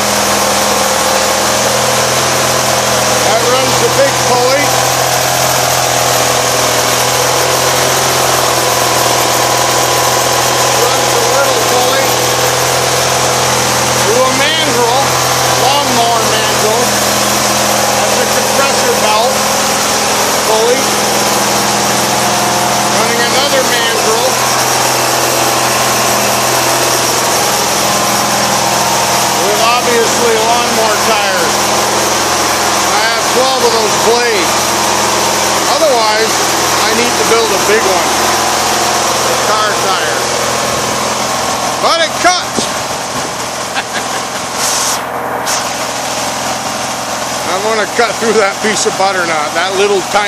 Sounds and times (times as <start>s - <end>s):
Engine: 0.0s - 50.2s
Speech: 3.2s - 4.8s, 10.8s - 12.2s, 14.0s - 17.0s, 18.0s - 19.4s, 20.4s - 20.9s, 22.9s - 24.5s, 29.4s - 31.6s, 32.9s - 34.6s, 35.6s - 38.2s, 39.3s - 40.3s, 41.8s - 42.7s, 47.4s - 50.2s.